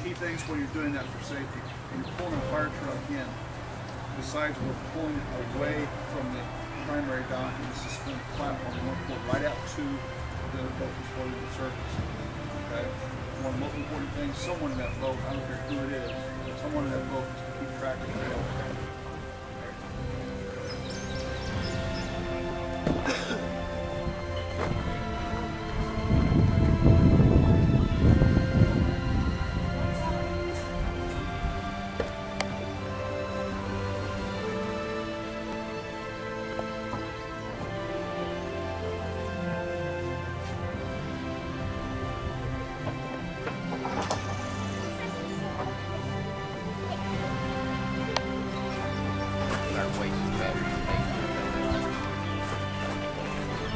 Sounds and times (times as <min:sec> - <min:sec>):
Speech: 0:00.0 - 0:03.4, 0:04.2 - 0:12.1, 0:12.7 - 0:18.9, 0:48.6 - 0:52.2
Music: 0:00.0 - 0:53.7.